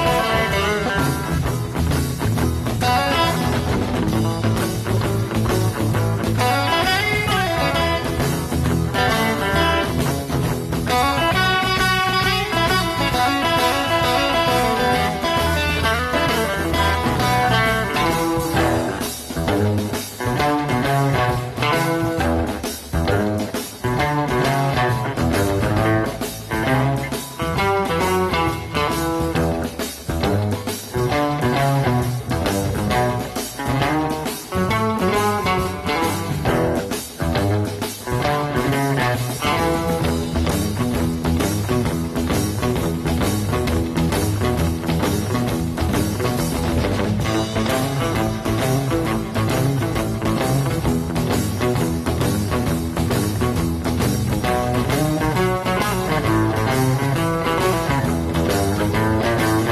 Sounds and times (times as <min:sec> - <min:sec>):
Electric guitar: 0:00.0 - 0:59.7.